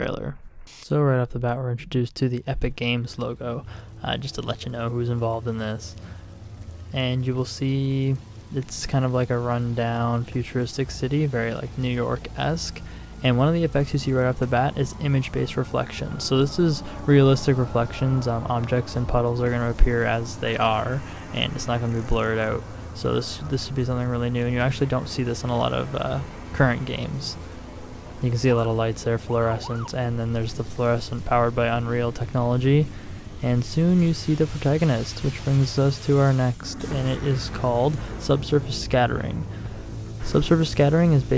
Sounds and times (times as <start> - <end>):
Speech: 0.0 - 6.0, 6.9 - 27.4, 28.2 - 39.5, 40.2 - 41.3.